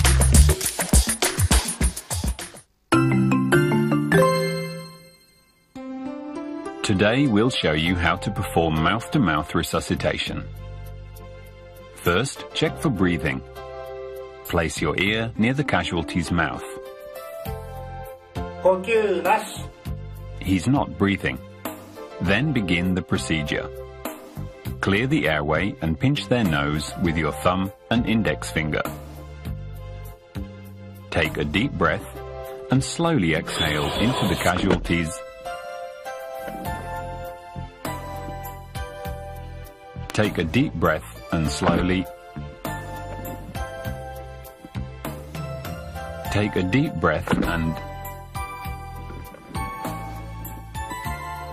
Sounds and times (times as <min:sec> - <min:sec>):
Music: 0:00.0 - 0:51.5
Speech: 0:06.8 - 0:10.5, 0:12.0 - 0:13.5, 0:14.5 - 0:16.8, 0:18.6 - 0:19.7, 0:20.4 - 0:21.4, 0:22.2 - 0:23.7, 0:24.8 - 0:28.9, 0:31.1 - 0:35.2, 0:40.1 - 0:42.1, 0:46.3 - 0:47.8.